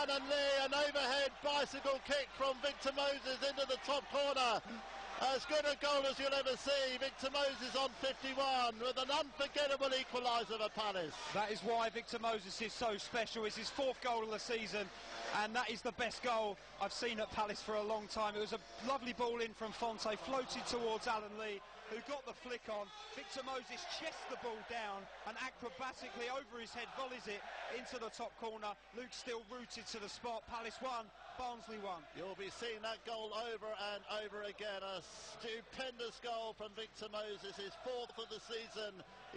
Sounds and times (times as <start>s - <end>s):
Speech: 0.0s - 39.3s.